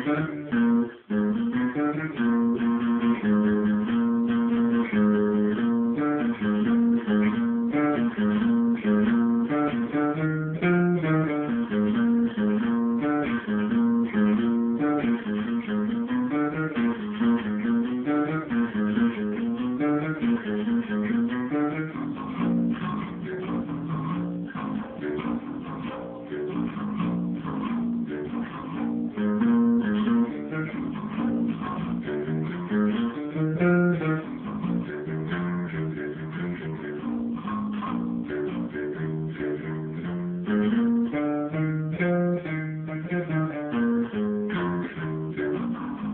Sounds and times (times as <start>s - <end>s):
Music: 0.0s - 46.1s.